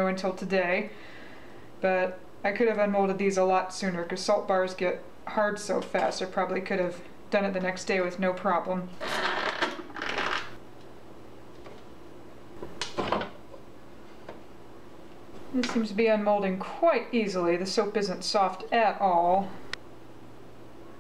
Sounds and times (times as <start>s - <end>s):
Speech: 0.0s - 0.9s, 1.8s - 8.9s, 15.5s - 19.6s
Inside, small room: 0.0s - 21.0s.